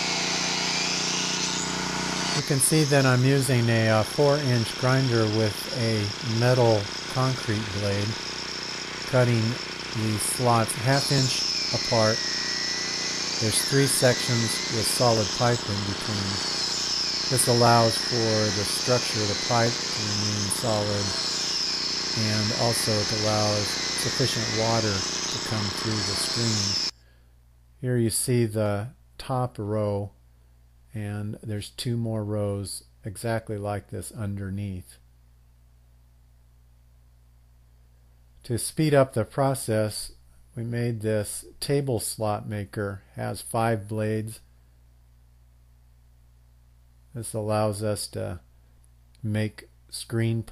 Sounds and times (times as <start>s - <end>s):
Speech: 2.4s - 8.2s, 9.1s - 12.2s, 13.4s - 16.4s, 17.3s - 21.2s, 22.2s - 26.9s, 27.8s - 30.2s, 30.9s - 35.0s, 38.4s - 44.4s, 47.2s - 48.5s, 49.2s - 50.5s.